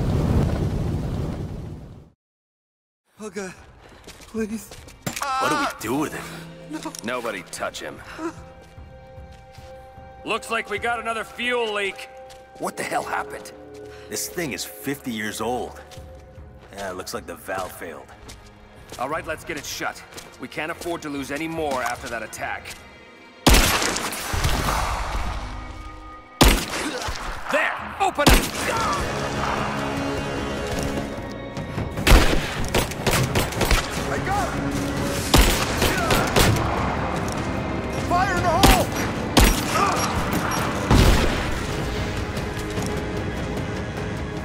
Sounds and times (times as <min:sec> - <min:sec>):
Gunshot, gunfire: 0:23.5 - 0:25.3, 0:26.4 - 0:27.5, 0:28.2 - 0:29.6, 0:32.0 - 0:34.0, 0:35.3 - 0:36.8, 0:38.6 - 0:40.2, 0:40.9 - 0:41.8.